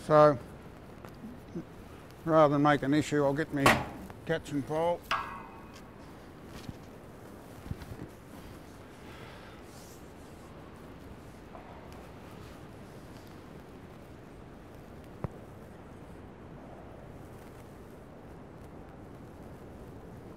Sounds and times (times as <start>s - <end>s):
Speech: 0.0s - 0.5s, 2.2s - 5.1s.